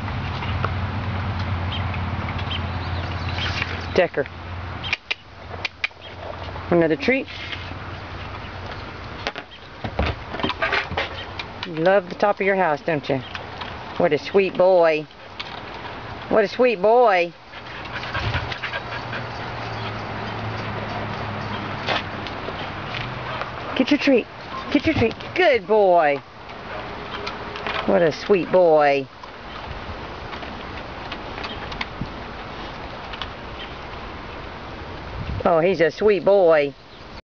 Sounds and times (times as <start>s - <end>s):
Speech: 3.9s - 4.3s, 6.7s - 7.4s, 11.7s - 13.3s, 14.0s - 15.1s, 16.3s - 17.4s, 23.8s - 26.2s, 27.9s - 29.1s, 35.4s - 36.8s.